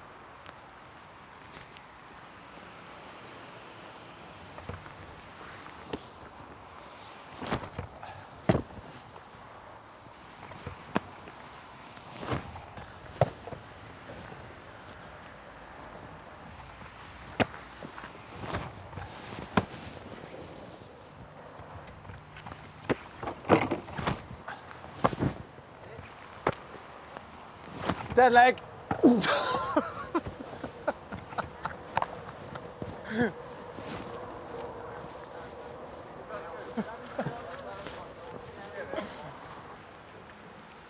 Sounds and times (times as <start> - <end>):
Speech: 28.1 - 28.6, 36.3 - 39.4.